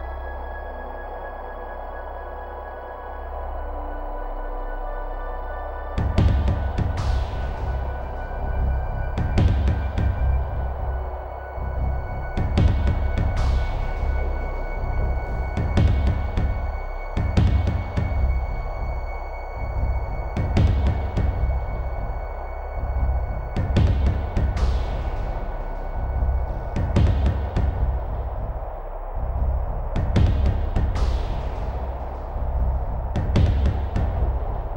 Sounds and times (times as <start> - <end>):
Music: 0.0 - 34.7.